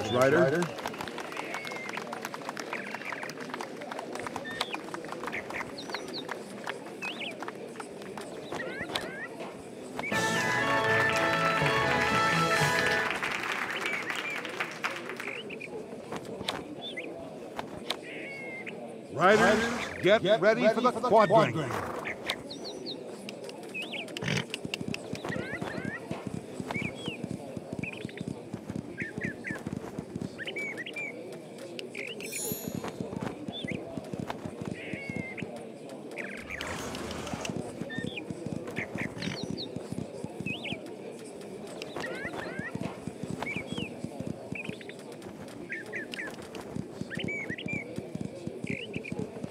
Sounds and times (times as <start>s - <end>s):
Speech: 0.0s - 10.2s, 12.9s - 49.5s.